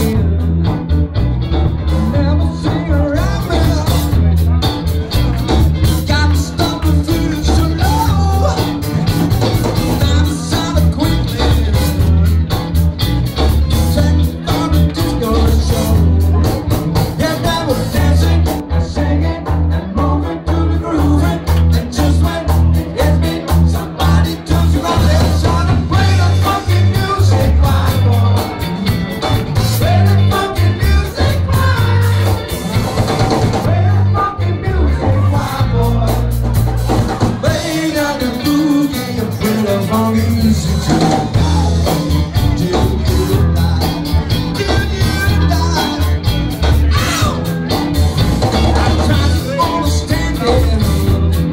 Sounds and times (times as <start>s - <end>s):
Blues: 0.0s - 51.5s
Rhythm and blues: 0.0s - 51.5s.